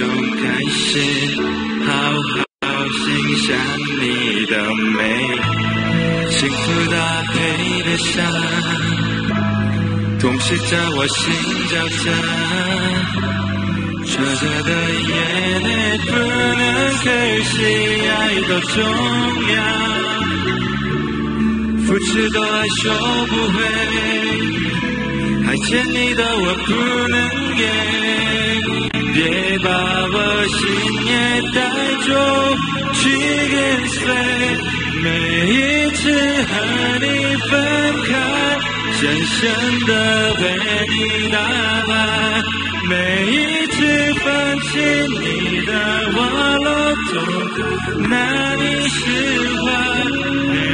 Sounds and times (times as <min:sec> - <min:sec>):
Male singing: 0:00.0 - 0:09.4, 0:10.2 - 0:13.4, 0:14.0 - 0:20.8, 0:21.8 - 0:50.7
Music: 0:00.0 - 0:50.7.